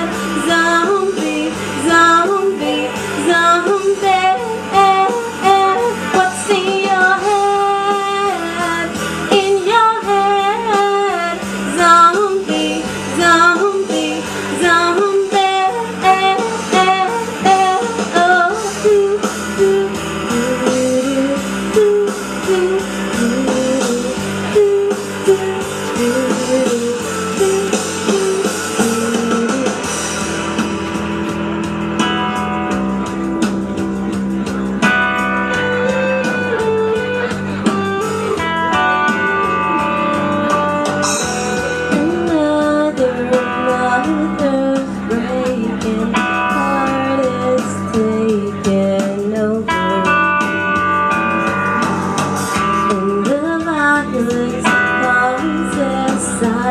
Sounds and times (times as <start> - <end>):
Blues: 0.0 - 56.7
Singing: 41.9 - 50.3.